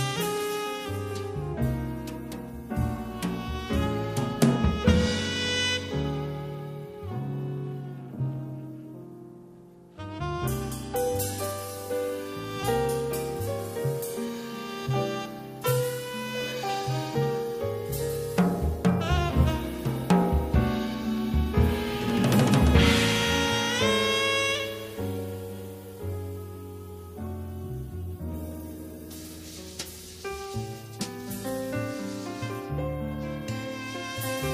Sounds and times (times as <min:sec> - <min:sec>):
Music: 0:00.0 - 0:34.5.